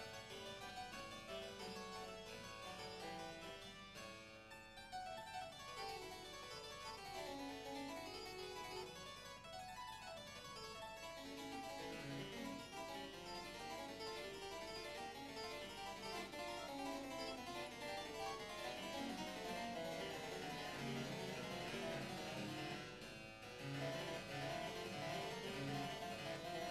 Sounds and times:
Harpsichord: 0:00.0 - 0:26.7.

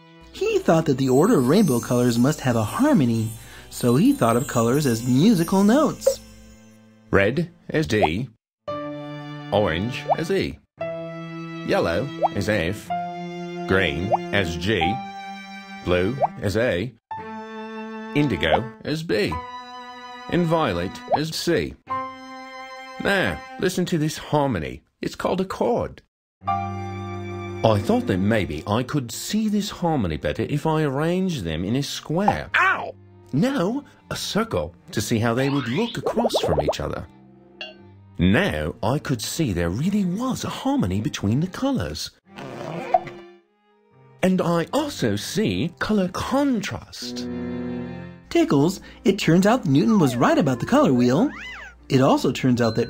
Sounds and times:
Speech: 0:00.4 - 0:06.2, 0:07.2 - 0:08.4, 0:09.5 - 0:10.6, 0:11.6 - 0:12.9, 0:13.7 - 0:15.0, 0:15.9 - 0:17.0, 0:18.2 - 0:19.4, 0:20.3 - 0:21.8, 0:23.0 - 0:26.1, 0:27.6 - 0:37.1, 0:38.2 - 0:42.2, 0:44.2 - 0:47.3, 0:48.3 - 0:52.9.

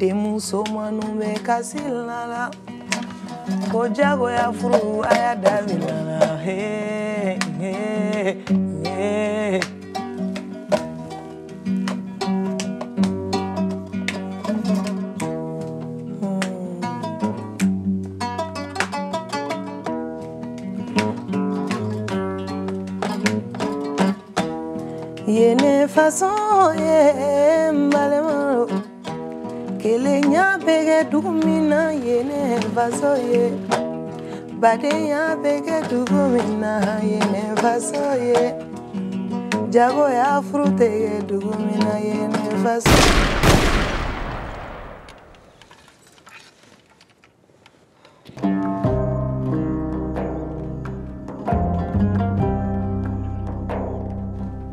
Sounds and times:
Music: 0:00.0 - 0:42.9, 0:48.2 - 0:54.7.

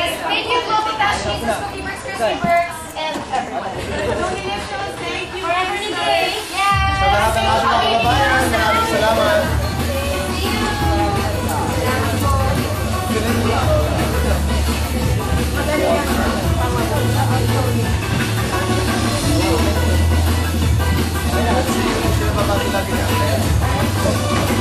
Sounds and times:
Music: 0:04.0 - 0:24.6.

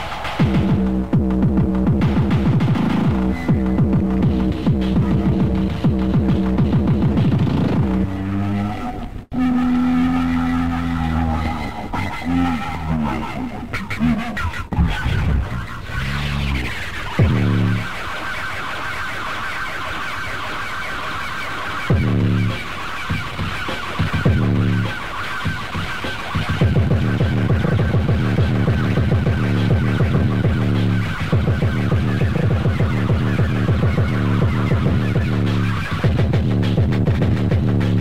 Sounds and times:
Music: 0:00.0 - 0:38.0
Sound effect: 0:02.0 - 0:38.0.

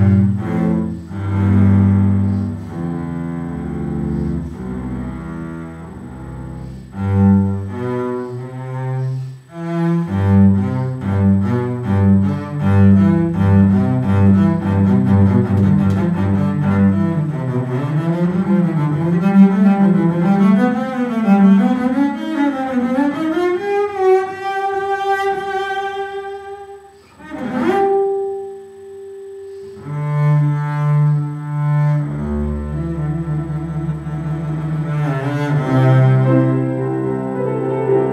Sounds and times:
Double bass: 0:00.0 - 0:38.1.

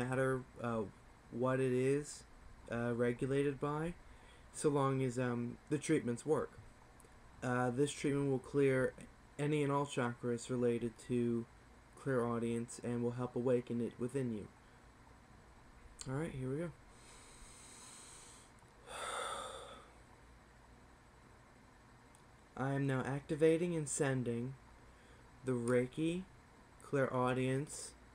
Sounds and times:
Speech: 0:00.0 - 0:04.0, 0:04.6 - 0:06.6, 0:07.4 - 0:14.5, 0:16.0 - 0:16.8, 0:22.6 - 0:24.6, 0:25.4 - 0:28.0.

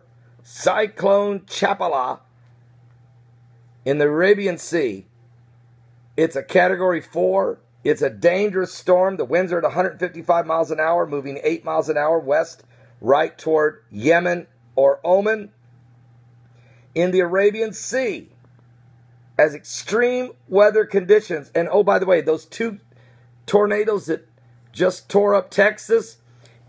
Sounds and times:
Speech: 0:00.5 - 0:02.3, 0:03.8 - 0:05.1, 0:06.2 - 0:15.6, 0:17.0 - 0:18.4, 0:19.4 - 0:22.8, 0:23.5 - 0:26.2.

